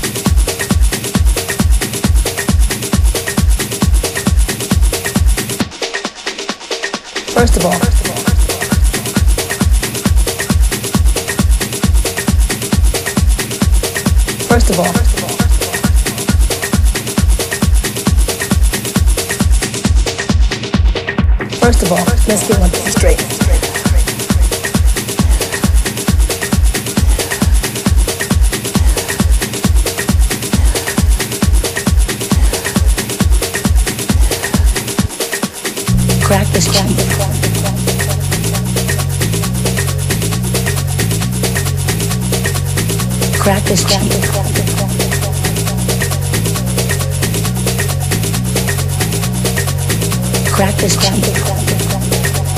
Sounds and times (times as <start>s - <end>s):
Music: 0.0s - 52.5s.